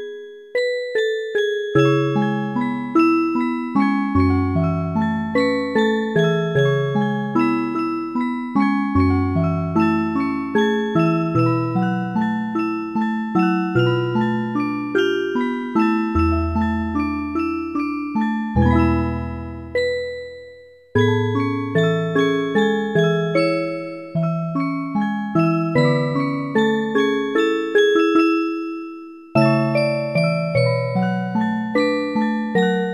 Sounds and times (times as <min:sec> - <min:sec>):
Jingle, tinkle: 0:00.0 - 0:32.9.